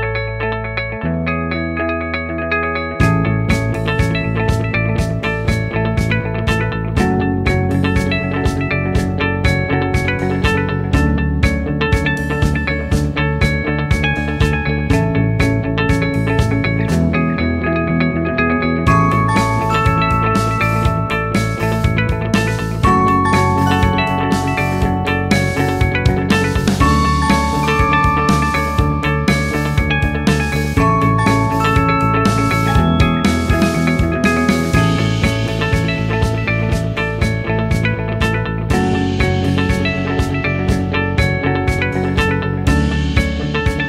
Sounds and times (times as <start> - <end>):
Music: 0.0 - 43.8.